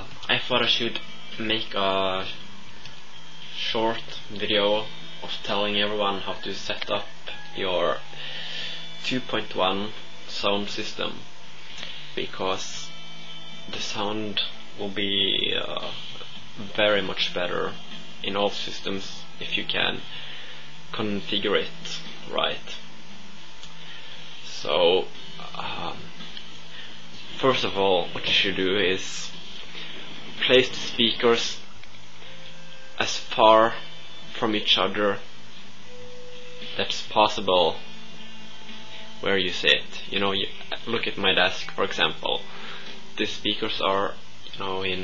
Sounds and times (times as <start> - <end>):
Speech: 0.0 - 2.4, 3.6 - 8.1, 9.0 - 11.2, 12.2 - 12.9, 13.7 - 16.0, 16.6 - 20.1, 20.9 - 22.8, 24.4 - 26.1, 27.4 - 29.4, 30.4 - 31.7, 33.0 - 35.3, 36.8 - 37.9, 39.2 - 42.5, 43.2 - 45.0
Music: 0.0 - 45.0.